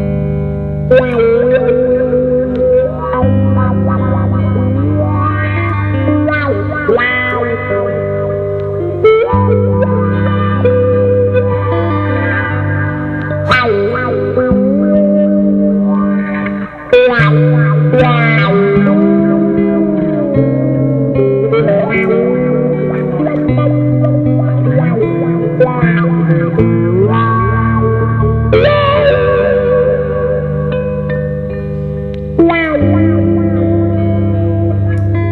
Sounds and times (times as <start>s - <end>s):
Electric guitar: 0.0s - 35.3s
Rock music: 0.0s - 35.3s.